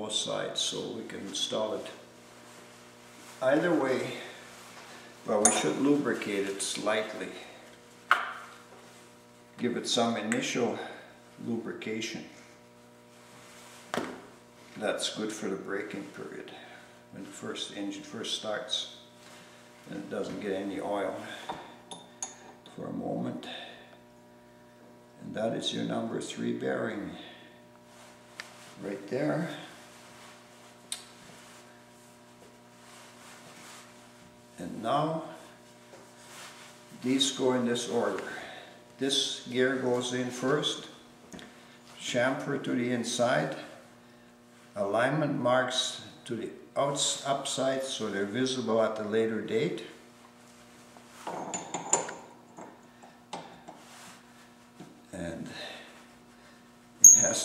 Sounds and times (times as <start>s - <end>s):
Speech: 0.0s - 2.1s, 3.4s - 4.4s, 5.3s - 7.6s, 9.6s - 12.4s, 14.8s - 19.0s, 19.9s - 21.4s, 22.7s - 23.8s, 25.2s - 27.4s, 28.8s - 29.8s, 34.6s - 35.5s, 37.0s - 41.0s, 42.0s - 43.8s, 44.8s - 50.0s, 55.1s - 55.8s, 57.2s - 57.4s.